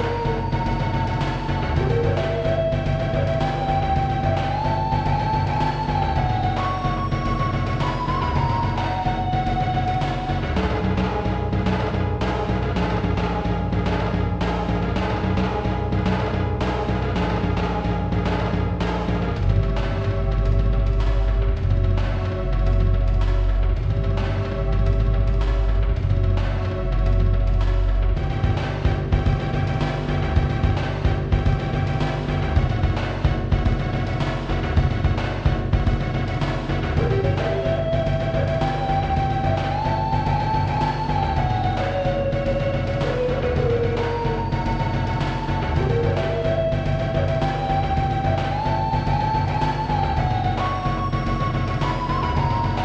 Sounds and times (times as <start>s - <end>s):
Rhythm and blues: 0.0s - 52.8s.